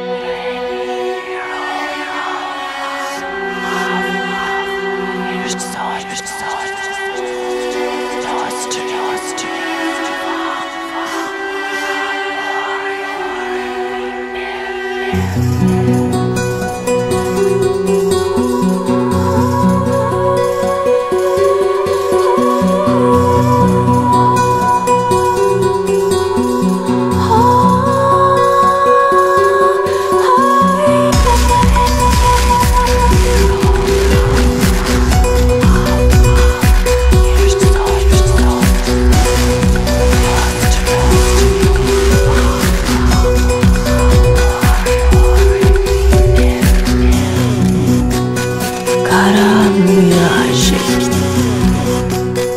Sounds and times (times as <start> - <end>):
Electronic music: 0.8 - 52.5.